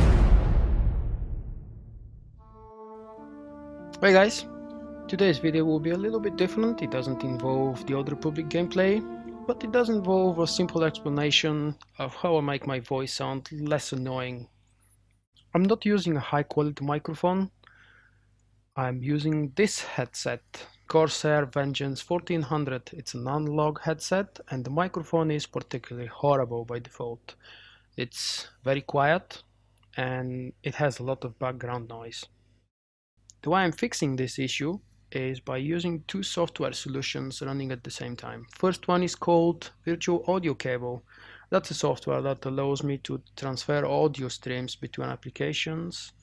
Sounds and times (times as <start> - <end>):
Speech: 4.0 - 4.5, 5.1 - 14.5, 15.5 - 17.6, 18.8 - 27.4, 28.0 - 32.3, 33.3 - 46.2.